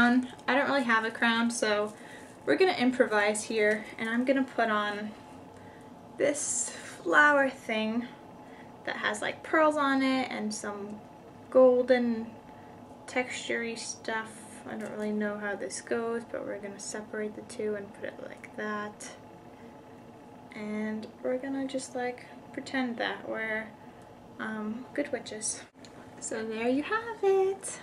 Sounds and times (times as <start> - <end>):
Speech: 0.0 - 5.2, 6.2 - 8.2, 8.9 - 12.4, 13.1 - 19.2, 20.5 - 23.8, 24.4 - 27.8
Inside, small room: 0.0 - 27.8.